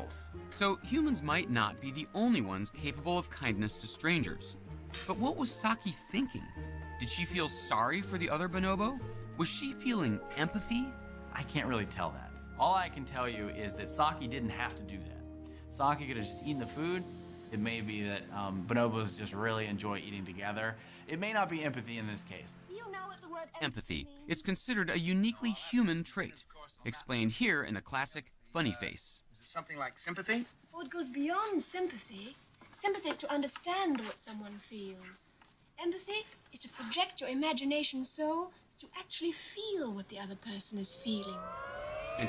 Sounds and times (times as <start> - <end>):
Narration, monologue: 0.0 - 42.2.